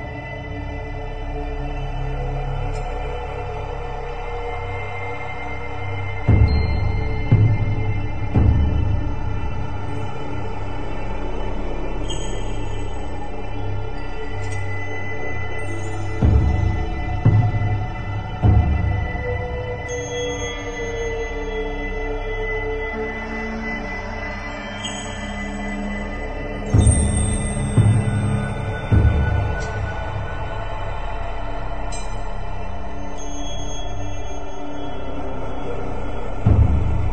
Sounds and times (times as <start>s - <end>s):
Music: 0.0s - 37.1s.